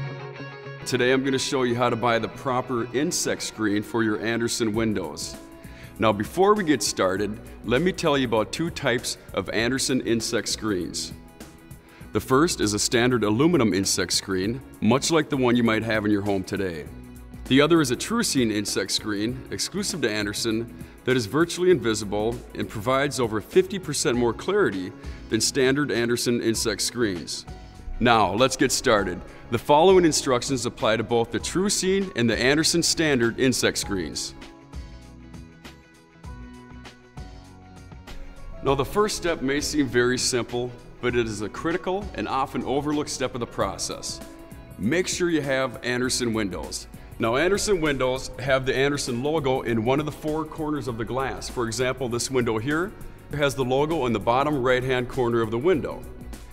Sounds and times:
Music: 0.0s - 56.5s
Speech: 0.8s - 5.4s, 6.0s - 11.2s, 12.1s - 16.9s, 17.5s - 34.4s, 38.6s - 44.2s, 44.8s - 56.0s.

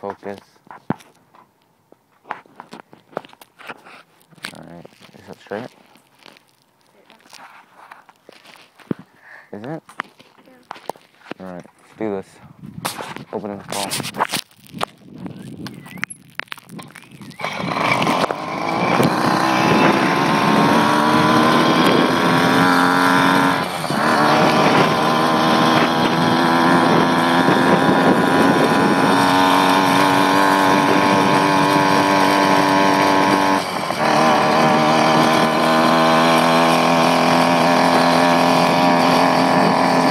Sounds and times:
Bicycle: 13.8s - 40.1s.

